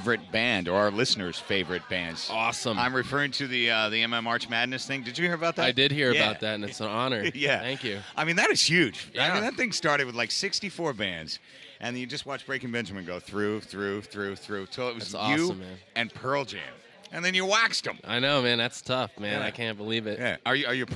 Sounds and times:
Speech: 0.0s - 20.9s.

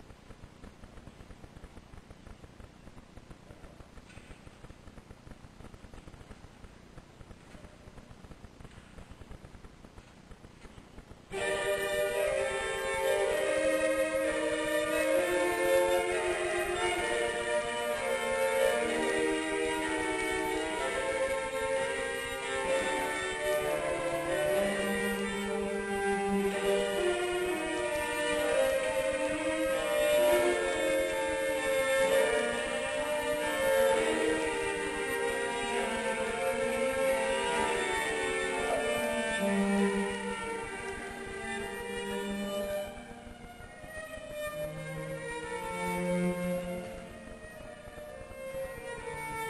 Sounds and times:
Cello: 7.2s - 49.4s
Violin, fiddle: 7.4s - 49.4s.

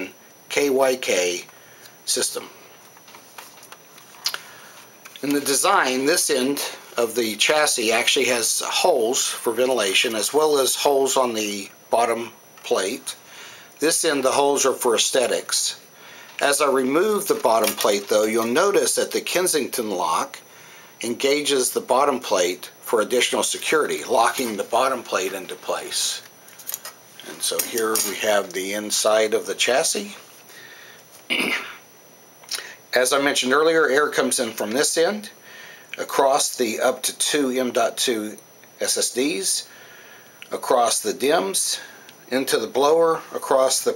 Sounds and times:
Speech: 0.0s - 2.6s, 5.2s - 13.2s, 13.8s - 15.8s, 16.4s - 20.4s, 21.0s - 26.3s, 27.2s - 30.3s, 32.9s - 35.4s, 36.0s - 39.7s, 40.5s - 43.9s.

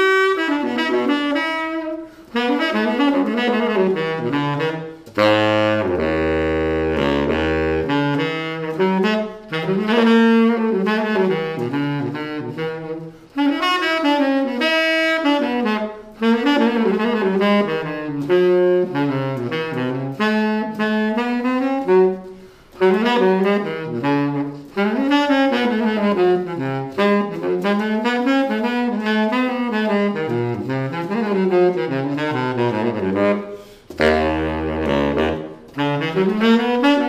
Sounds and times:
Wind instrument, woodwind instrument: 0.0s - 37.0s.

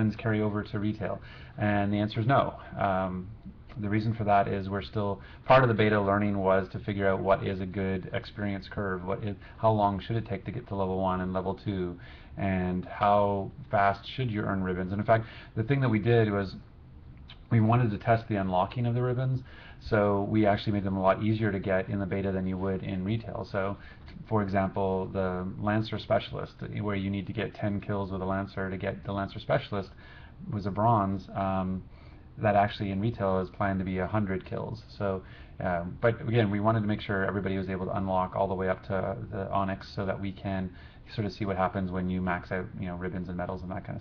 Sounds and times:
Speech: 0.0s - 16.7s, 17.3s - 44.0s.

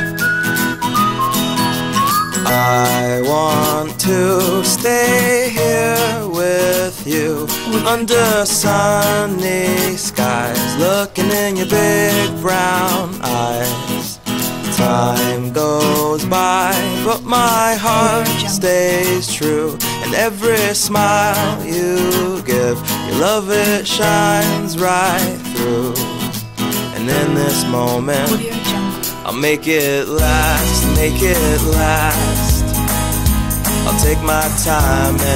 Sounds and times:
Music: 0.0s - 35.3s.

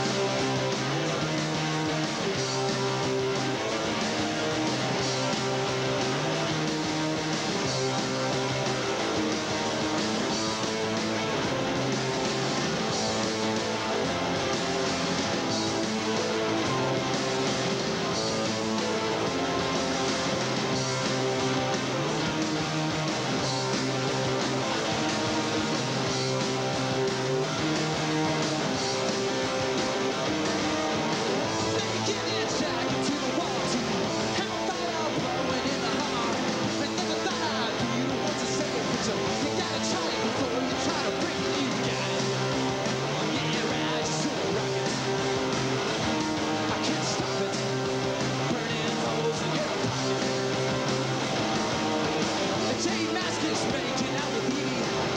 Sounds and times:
Pop music: 0.0s - 55.1s.

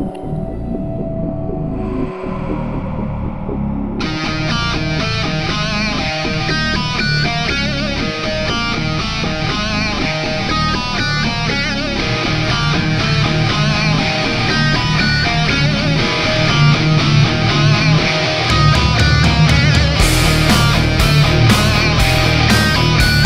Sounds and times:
Music: 0.0s - 23.2s.

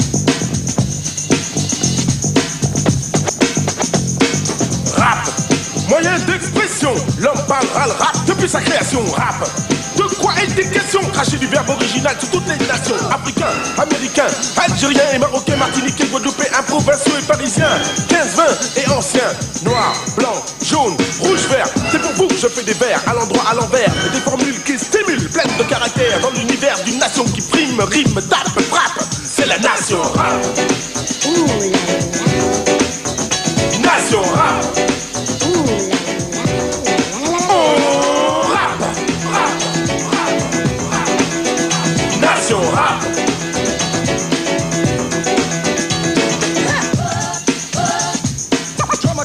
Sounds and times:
Hip hop music: 0.0s - 49.2s
Rapping: 4.9s - 32.4s, 33.6s - 43.4s, 46.6s - 49.2s.

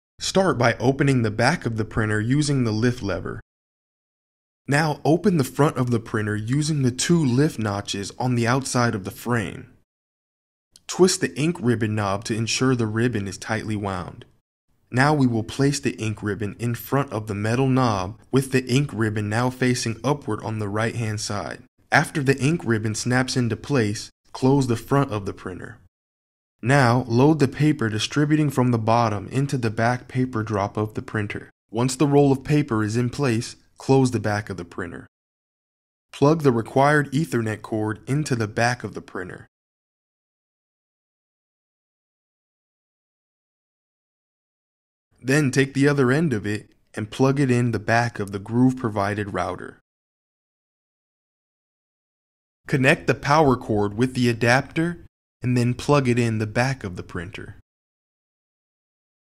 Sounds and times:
Speech: 0.2s - 3.4s, 4.7s - 9.8s, 10.8s - 25.9s, 26.6s - 35.1s, 36.2s - 39.5s, 45.2s - 49.8s, 52.7s - 57.6s.

